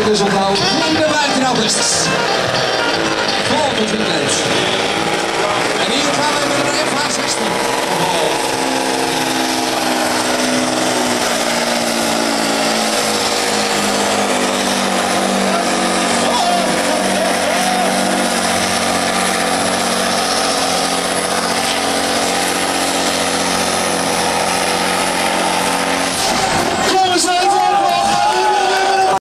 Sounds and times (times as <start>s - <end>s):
Speech: 5.5s - 8.4s, 26.9s - 29.2s.